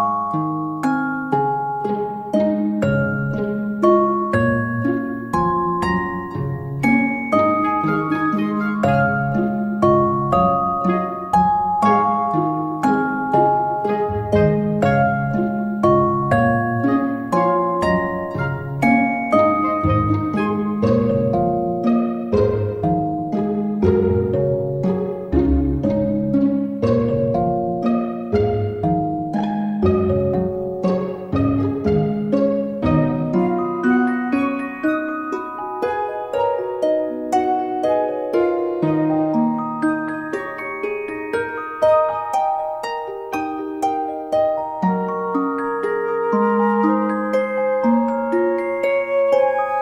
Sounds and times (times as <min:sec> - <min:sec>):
Glockenspiel: 0:00.0 - 0:49.8.